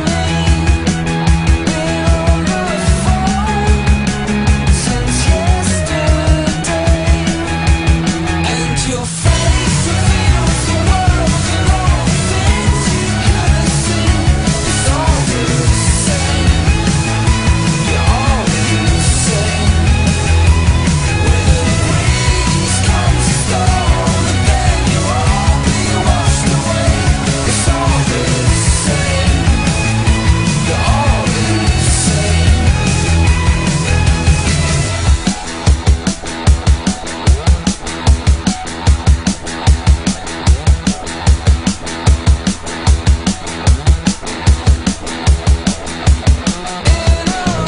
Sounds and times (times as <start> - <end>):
Music: 0.0 - 47.6.